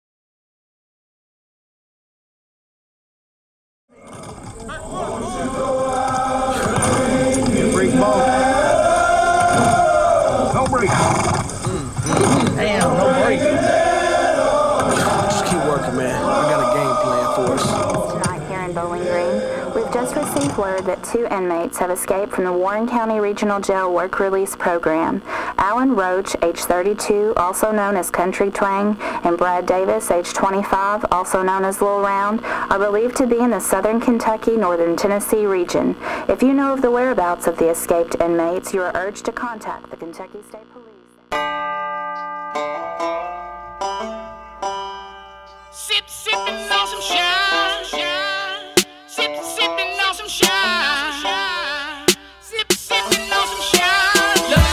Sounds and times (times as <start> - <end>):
Speech: 7.6 - 8.3, 11.7 - 13.5, 15.3 - 41.1.